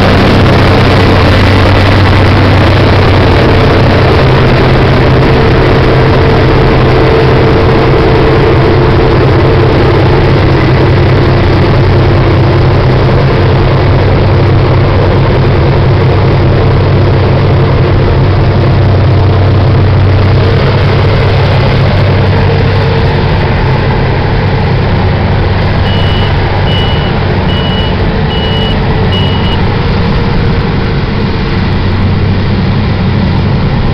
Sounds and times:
Truck: 0:00.0 - 0:33.9.

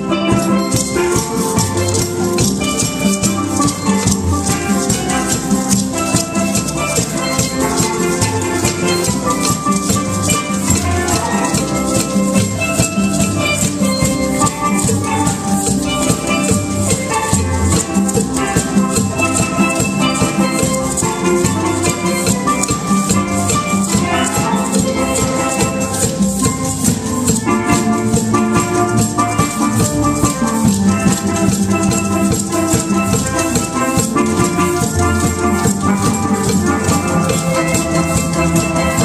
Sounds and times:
Maraca: 0:00.0 - 0:39.0
Orchestra: 0:00.0 - 0:39.0
Steelpan: 0:00.0 - 0:39.0.

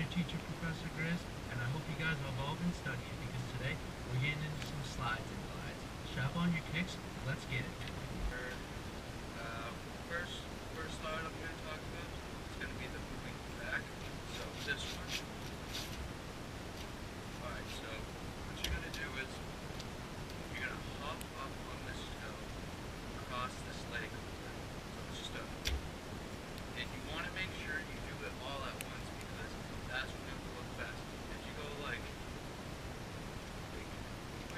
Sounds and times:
Speech: 0:00.0 - 0:08.7, 0:09.4 - 0:15.2, 0:17.4 - 0:19.4, 0:20.5 - 0:22.5, 0:23.2 - 0:25.6, 0:26.8 - 0:32.2, 0:33.7 - 0:34.5
Shuffle: 0:14.3 - 0:16.1.

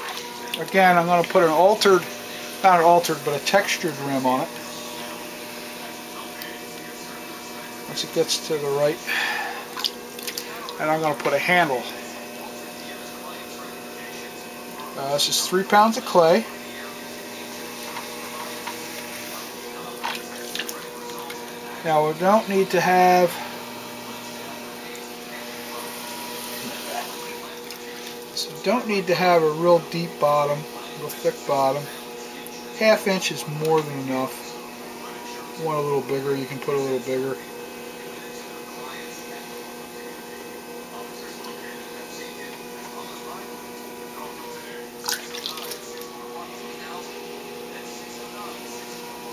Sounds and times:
Electric shaver, electric razor: 0:00.0 - 0:49.3
Speech: 0:00.0 - 0:49.3.

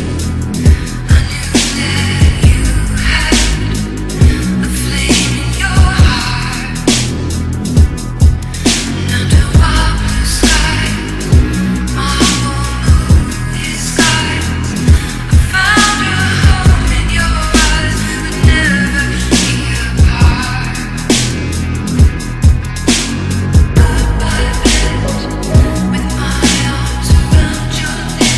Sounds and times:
Dubstep: 0:00.0 - 0:28.3.

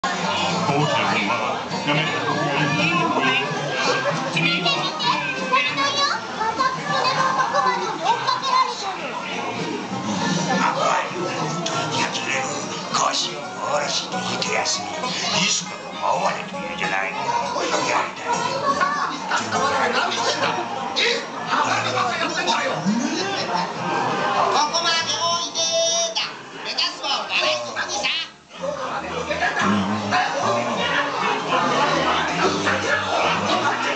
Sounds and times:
Children playing: 0:00.0 - 0:12.7, 0:16.9 - 0:33.9
Music: 0:00.0 - 0:33.9.

